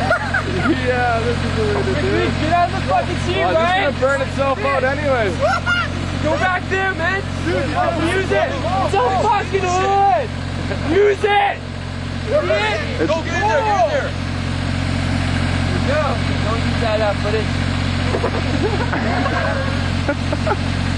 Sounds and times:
Car: 0.0s - 20.9s
Speech: 15.8s - 17.5s.

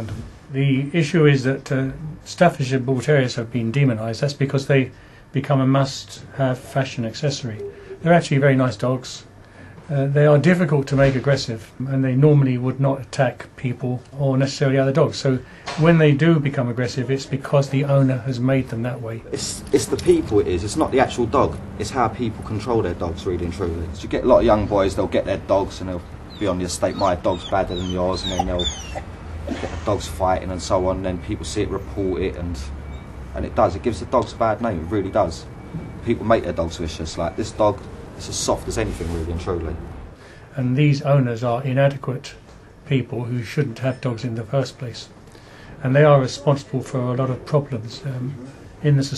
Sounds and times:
Speech: 0.0s - 9.3s, 9.9s - 29.0s, 29.7s - 32.8s, 33.4s - 39.8s, 40.5s - 45.1s, 45.8s - 49.1s
Outside, urban or manmade: 18.7s - 40.5s
Dog: 26.3s - 29.1s.

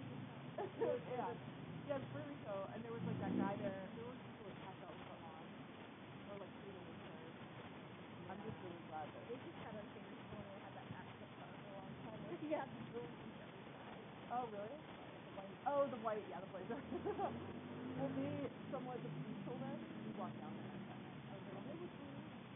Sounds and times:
Speech: 0.0s - 5.6s, 6.2s - 7.5s, 8.2s - 13.7s, 14.3s - 17.4s, 18.0s - 22.4s.

